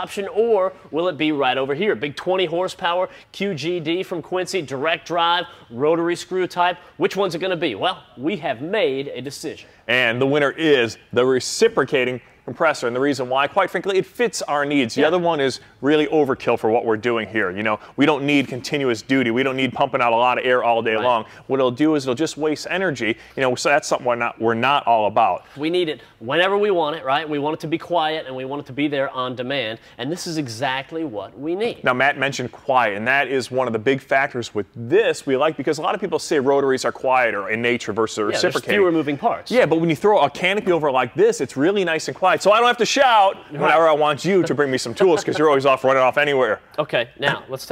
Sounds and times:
Speech: 0.0s - 47.7s.

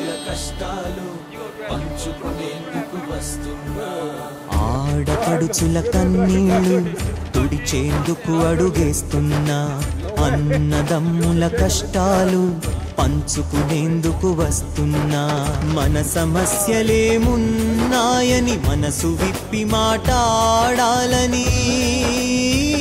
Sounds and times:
Music: 0.0s - 22.8s
Speech: 4.5s - 14.6s.

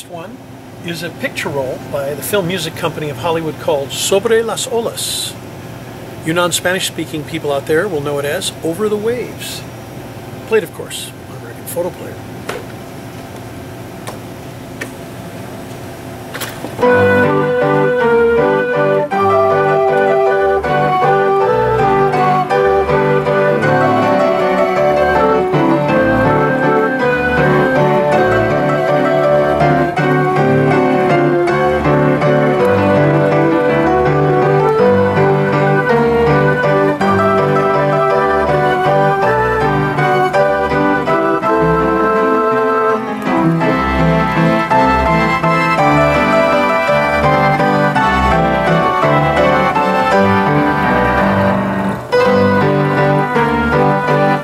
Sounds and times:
Keyboard (musical): 16.8s - 54.4s.

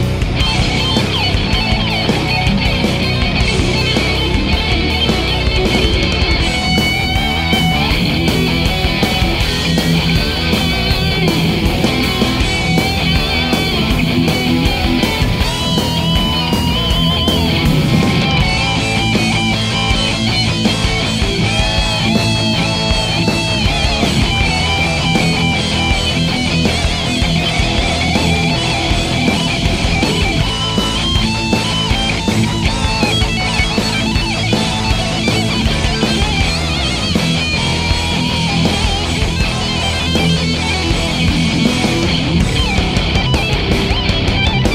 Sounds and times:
Electric guitar: 0.0s - 44.7s.

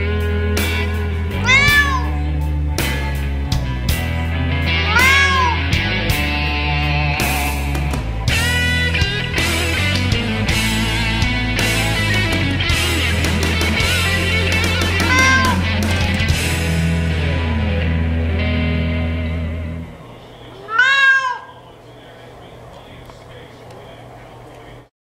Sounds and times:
Music: 0.0s - 20.0s
Caterwaul: 1.4s - 2.2s, 4.8s - 5.7s, 15.0s - 15.7s, 20.7s - 21.6s.

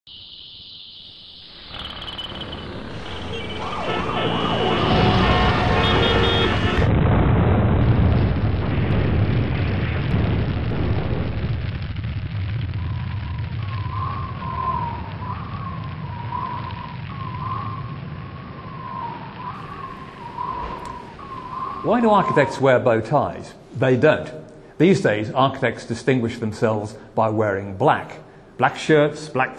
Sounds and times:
Explosion: 1.1s - 23.1s.

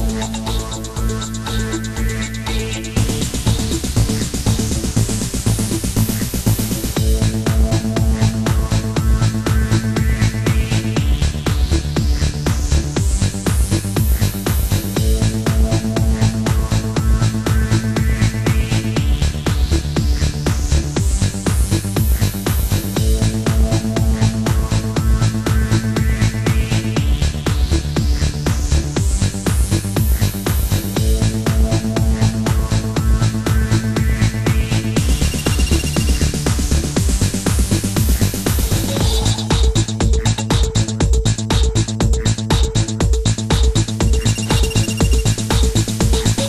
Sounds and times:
Music: 0.0s - 46.4s.

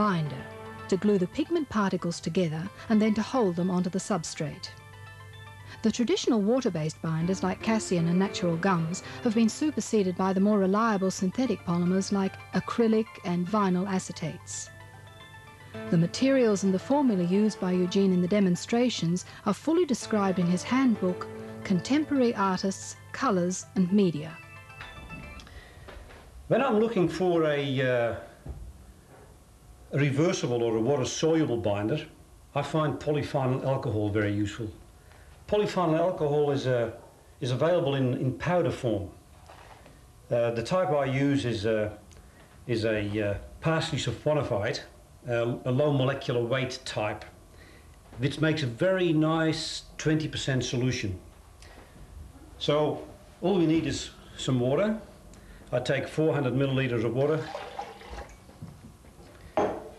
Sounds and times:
Speech: 0.0s - 4.7s, 5.9s - 14.7s, 15.9s - 24.4s, 26.5s - 28.3s, 29.9s - 34.8s, 35.5s - 39.2s, 40.3s - 42.0s, 42.7s - 47.4s, 48.2s - 51.3s, 52.6s - 55.1s, 55.7s - 57.5s
Liquid: 57.2s - 58.4s.

